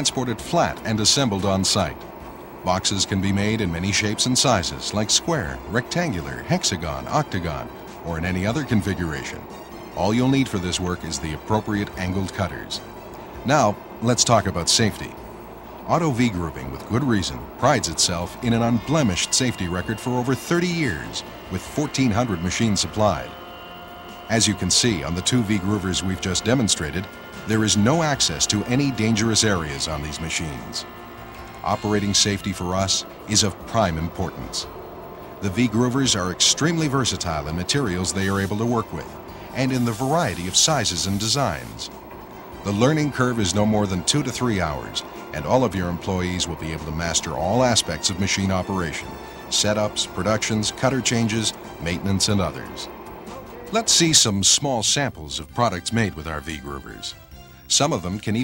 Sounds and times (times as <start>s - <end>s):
Speech: 0.0s - 2.0s, 2.6s - 12.8s, 13.4s - 15.2s, 15.9s - 23.4s, 24.3s - 30.9s, 31.6s - 34.7s, 35.4s - 42.0s, 42.6s - 58.4s
Music: 0.0s - 58.4s.